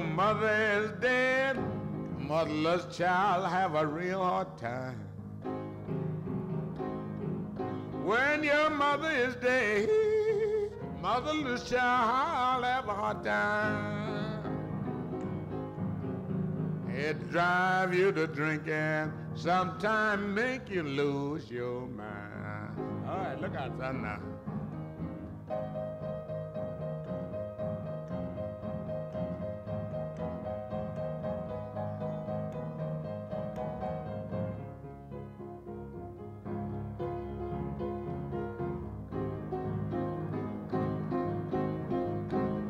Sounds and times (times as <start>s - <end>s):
Opera: 0.0s - 5.2s, 7.8s - 15.1s, 16.8s - 25.7s.